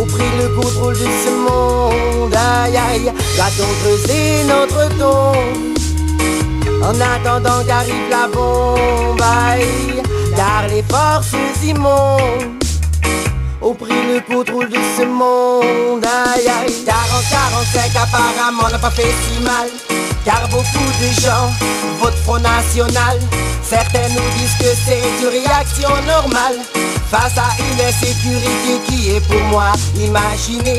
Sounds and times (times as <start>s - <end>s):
Music: 0.0s - 30.7s.